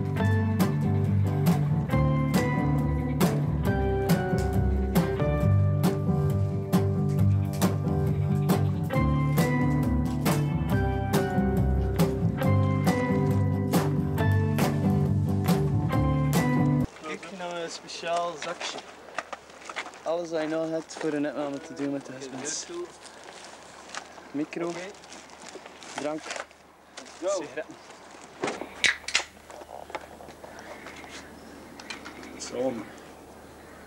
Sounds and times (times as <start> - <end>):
Speech: 20.0 - 22.9, 32.4 - 33.0.